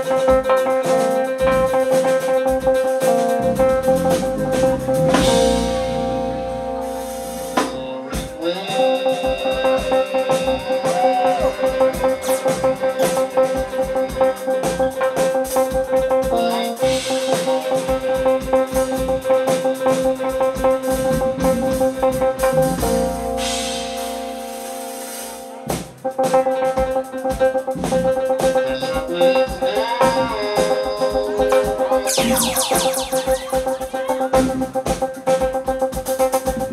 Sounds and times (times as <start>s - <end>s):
Music: 0.0s - 36.7s.